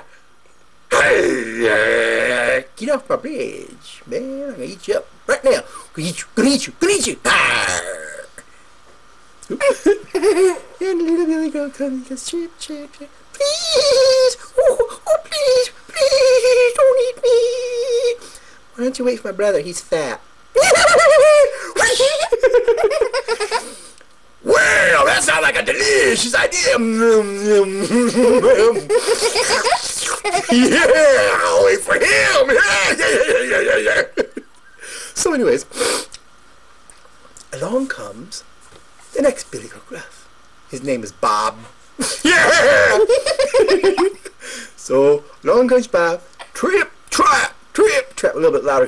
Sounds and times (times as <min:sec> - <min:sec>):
Speech: 0:00.9 - 0:08.4, 0:10.8 - 0:14.4, 0:18.8 - 0:20.2, 0:24.4 - 0:28.9, 0:30.5 - 0:34.1, 0:37.5 - 0:38.5, 0:39.1 - 0:40.1, 0:44.8 - 0:48.8.